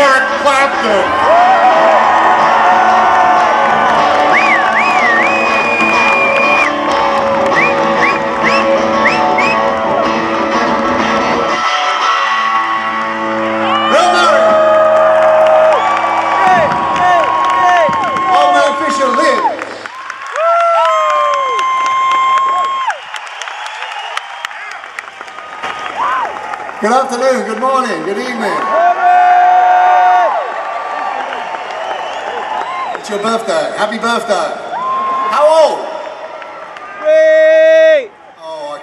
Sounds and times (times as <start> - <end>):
Electric guitar: 1.0 - 18.3.